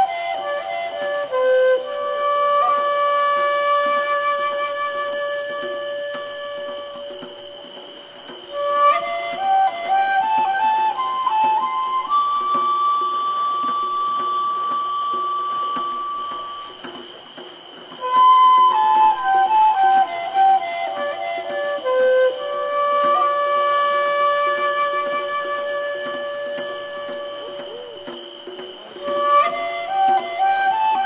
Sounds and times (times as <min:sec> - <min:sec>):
Flute: 0:00.0 - 0:31.0.